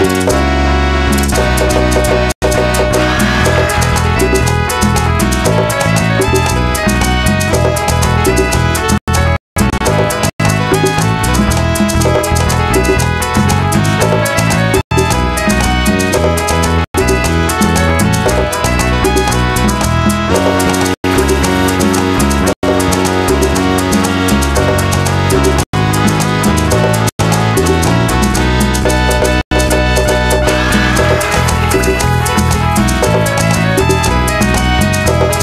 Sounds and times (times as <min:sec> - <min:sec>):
Soundtrack music: 0:00.0 - 0:35.4.